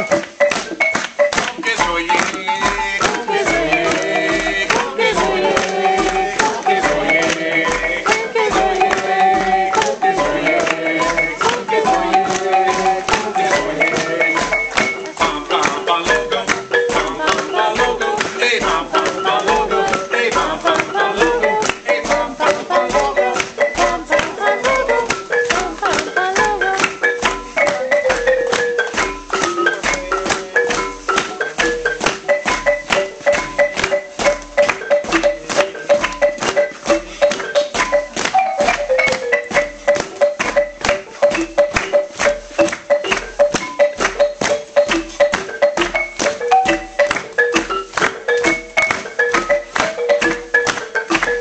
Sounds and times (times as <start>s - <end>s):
Marimba, xylophone: 0.0s - 51.4s.